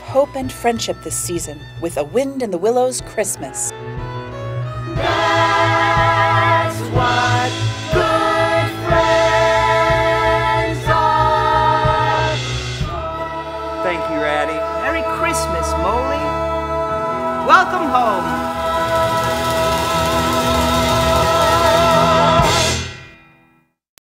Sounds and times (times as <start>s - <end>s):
Music: 0.0s - 23.8s.